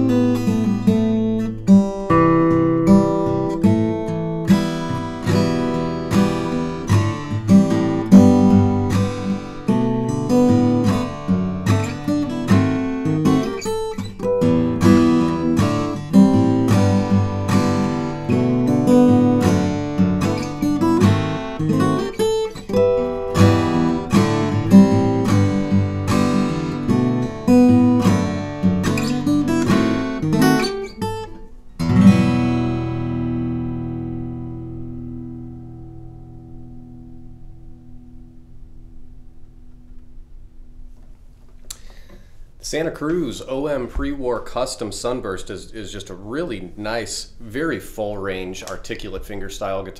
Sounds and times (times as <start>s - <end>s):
Strum: 0.0s - 44.4s.